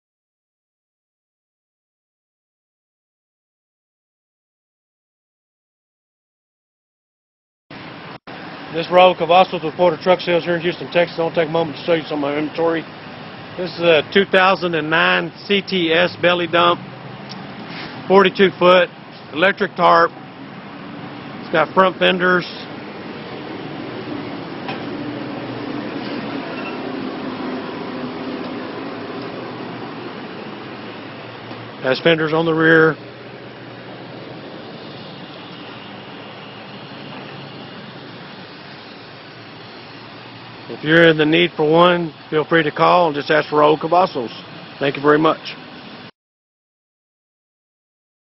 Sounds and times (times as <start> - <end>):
Vehicle: 7.7 - 46.1
Speech: 8.7 - 12.9, 13.6 - 16.8, 18.1 - 20.2, 21.5 - 22.7, 31.8 - 33.0, 40.7 - 45.6.